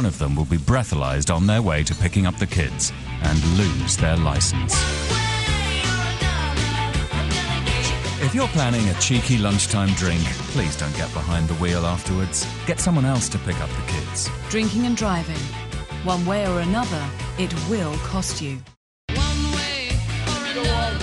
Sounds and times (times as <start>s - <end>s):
Radio: 0.0s - 4.7s, 8.2s - 14.8s
Speech: 0.0s - 4.7s, 8.2s - 15.5s, 16.1s - 18.6s
Music: 0.0s - 21.0s.